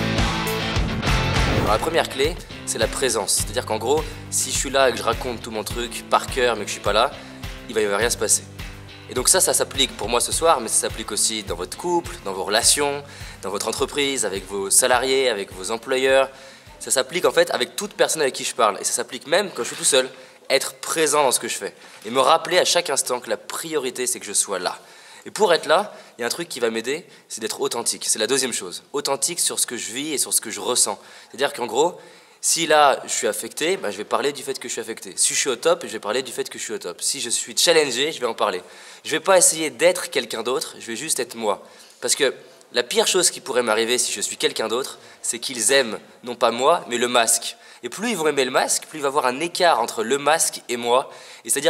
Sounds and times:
Music: 0.0s - 20.1s
Speech: 1.7s - 8.5s, 9.1s - 51.6s.

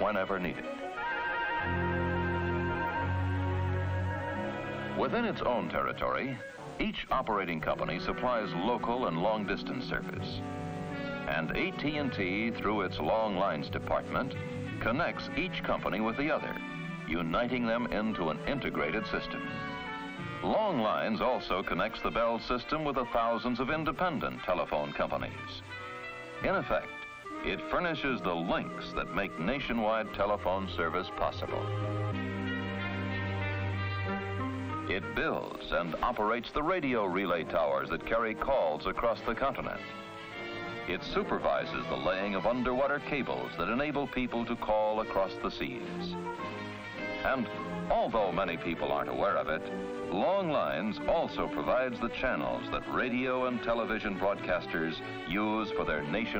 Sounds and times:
Speech: 0.0s - 0.7s, 5.0s - 10.4s, 11.3s - 19.5s, 20.4s - 25.6s, 26.4s - 31.7s, 34.9s - 39.9s, 40.9s - 46.2s, 47.2s - 56.3s
Music: 0.0s - 56.3s.

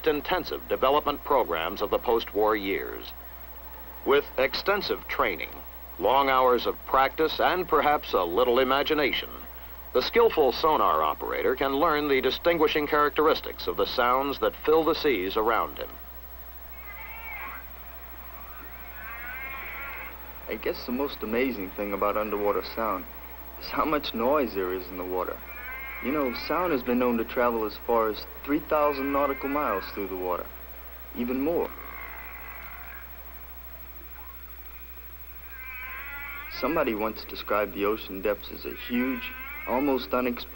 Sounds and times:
Speech: 0.0s - 3.2s, 4.0s - 16.0s, 20.5s - 25.4s, 26.0s - 30.5s, 31.1s - 31.8s, 36.5s - 40.5s.

